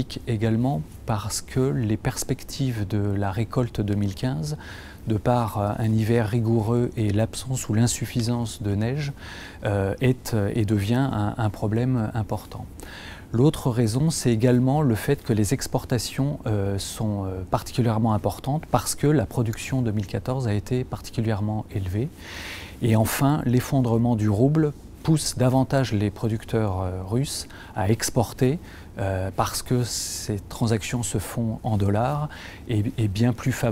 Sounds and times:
Speech: 0.0 - 12.7, 13.3 - 22.2, 22.8 - 33.7.

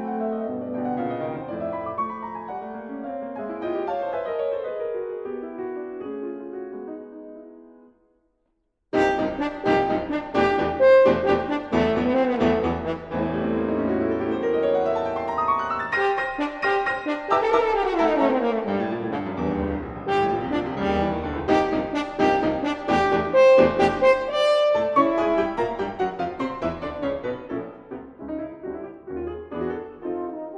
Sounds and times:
Piano: 0.0 - 30.5
French horn: 9.0 - 14.6, 15.8 - 28.7, 29.7 - 30.5.

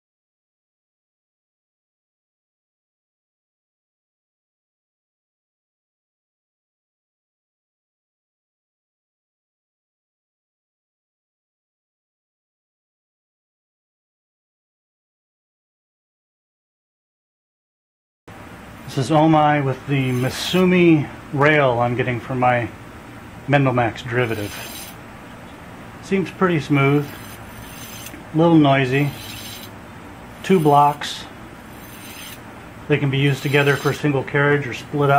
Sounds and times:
Speech: 18.9 - 22.8, 23.5 - 24.6, 26.0 - 27.1, 28.3 - 29.2, 30.4 - 31.3, 32.9 - 35.1.

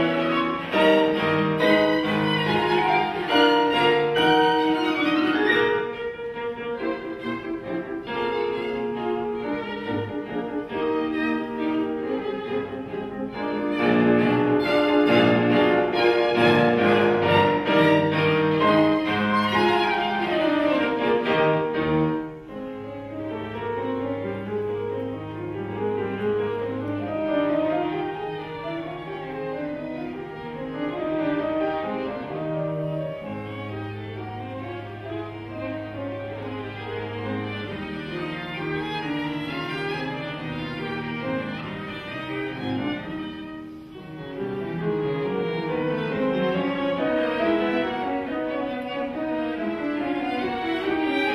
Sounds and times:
Cello: 0.0 - 51.3
Classical music: 0.0 - 51.3
Orchestra: 0.0 - 51.3
Piano: 0.0 - 51.3
Violin, fiddle: 0.0 - 51.3.

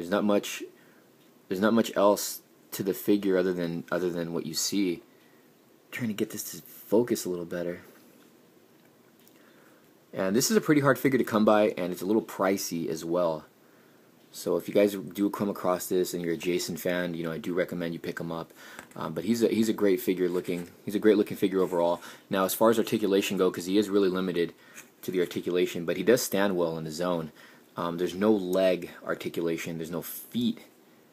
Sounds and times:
Speech: 0.0 - 0.8, 1.5 - 5.1, 5.9 - 8.0, 10.1 - 13.5, 14.3 - 30.8
Inside, small room: 0.0 - 31.1.

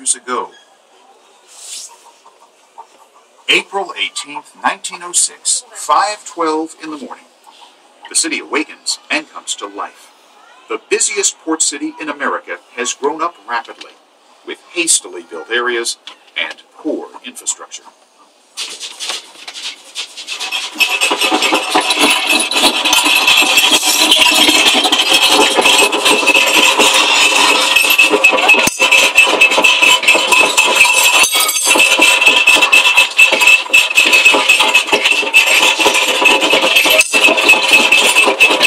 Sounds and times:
Speech: 0.0 - 0.6, 3.5 - 7.3, 8.1 - 17.9.

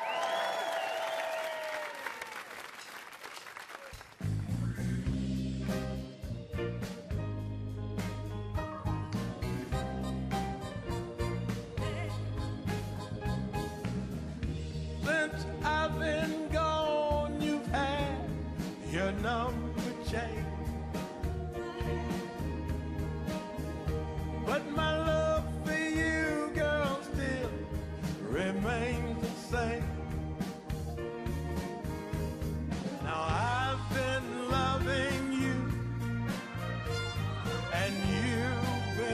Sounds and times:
Music: 3.9 - 39.1.

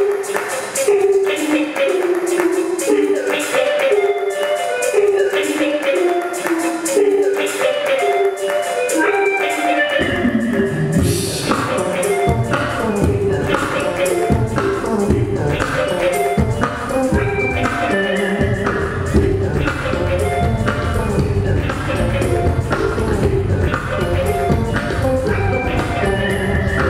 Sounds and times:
Music: 0.0 - 26.9.

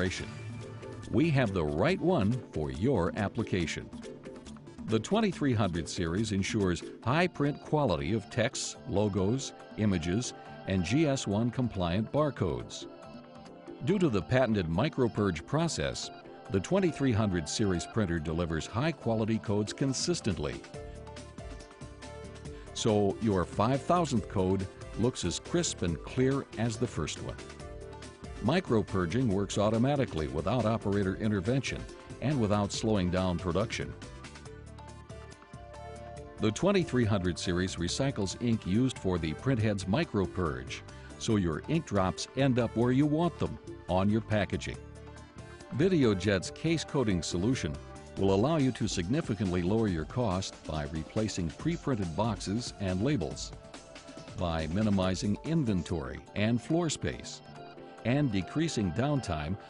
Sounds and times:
Speech: 0.0 - 0.3, 1.1 - 3.9, 4.9 - 12.8, 13.8 - 20.7, 22.8 - 27.4, 28.4 - 34.0, 36.4 - 44.8, 45.7 - 53.6, 54.4 - 57.4, 58.1 - 59.6
Music: 0.0 - 59.7.

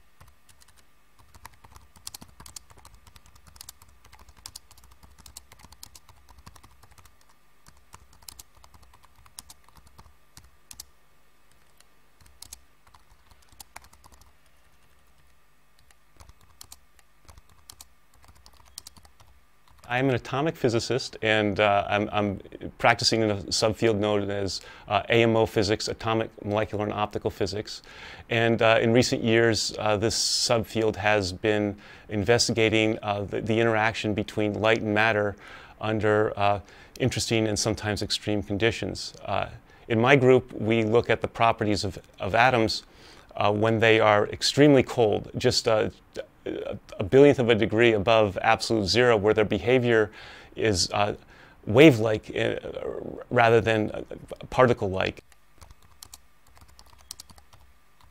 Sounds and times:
Speech: 19.9 - 55.2.

